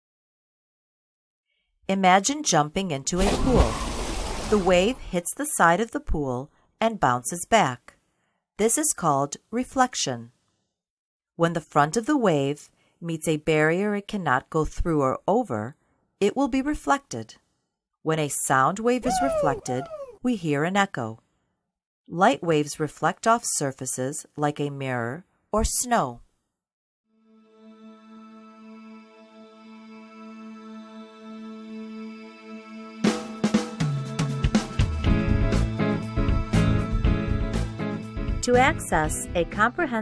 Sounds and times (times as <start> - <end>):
Speech: 1.9 - 3.8, 4.5 - 7.9, 8.6 - 10.3, 11.4 - 17.4, 18.1 - 21.2, 22.1 - 26.2, 38.4 - 40.0.